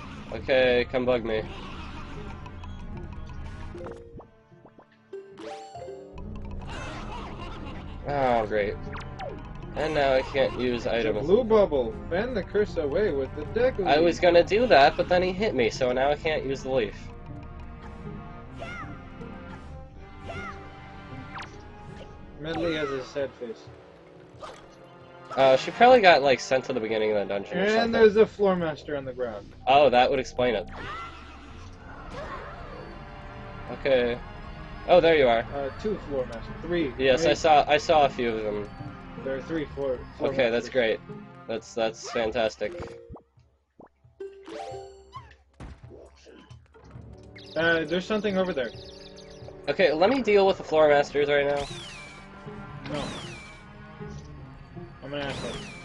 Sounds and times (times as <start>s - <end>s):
Music: 0.0s - 55.8s
Speech: 0.3s - 1.5s, 8.1s - 8.8s, 9.8s - 17.0s, 22.4s - 23.6s, 25.4s - 30.7s, 33.7s - 34.2s, 34.9s - 38.6s, 39.3s - 42.9s, 47.6s - 48.8s, 49.7s - 51.6s, 55.1s - 55.6s.